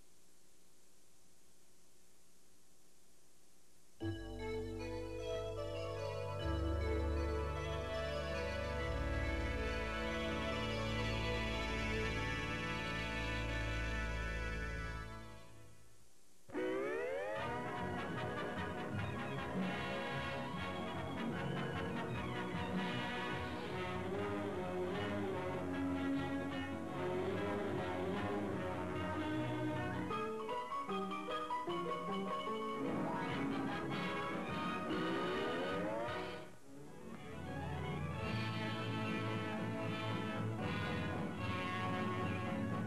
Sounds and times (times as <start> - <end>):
Music: 4.0 - 15.8, 16.5 - 42.8.